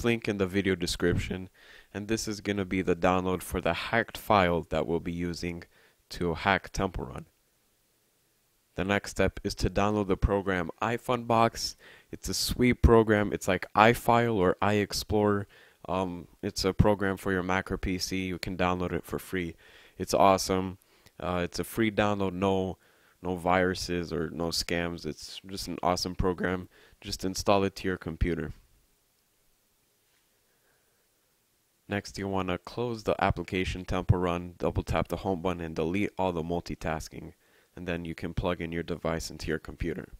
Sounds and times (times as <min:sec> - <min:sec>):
Speech: 0:00.0 - 0:07.3, 0:08.8 - 0:28.6, 0:31.9 - 0:40.1.